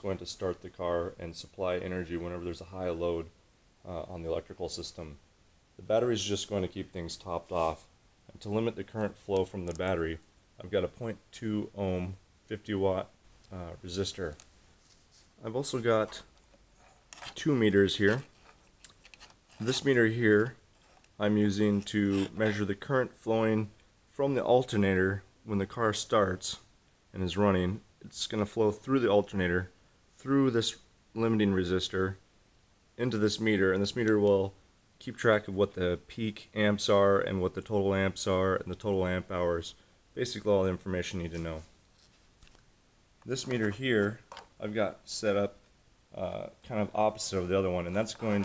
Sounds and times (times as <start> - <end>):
Speech: 0.0 - 5.2, 5.8 - 14.4, 15.4 - 16.3, 17.2 - 18.3, 19.6 - 20.6, 21.2 - 32.2, 33.0 - 41.7, 43.2 - 48.4.